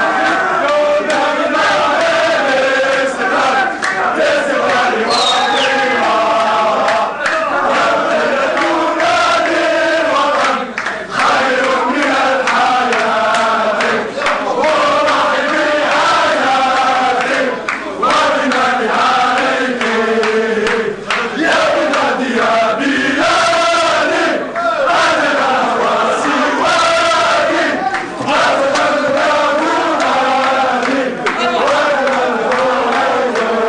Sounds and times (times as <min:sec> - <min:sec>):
Mantra: 0:00.0 - 0:33.6.